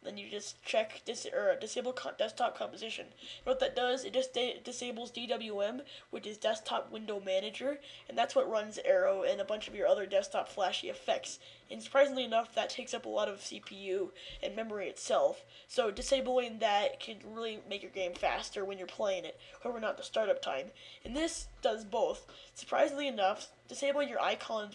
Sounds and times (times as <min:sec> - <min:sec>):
Speech: 0:00.0 - 0:24.7.